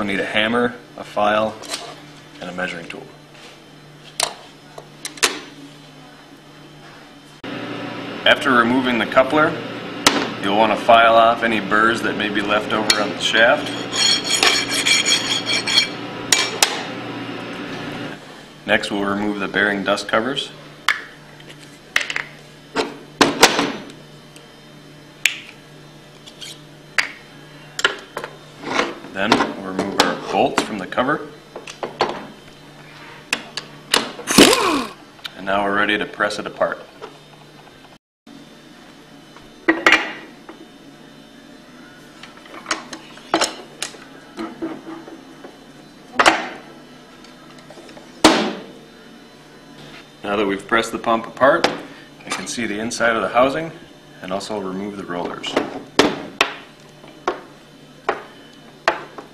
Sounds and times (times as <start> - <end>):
Whack, thwack: 48.2 - 48.6.